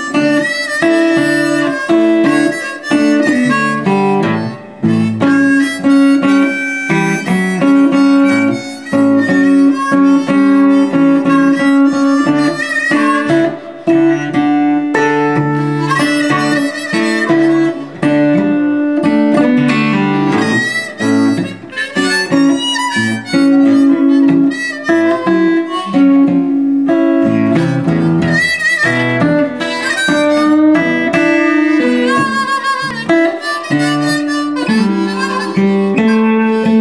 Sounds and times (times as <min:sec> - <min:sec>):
Acoustic guitar: 0:00.0 - 0:36.8
Harmonica: 0:00.0 - 0:36.8
Strum: 0:00.0 - 0:36.8.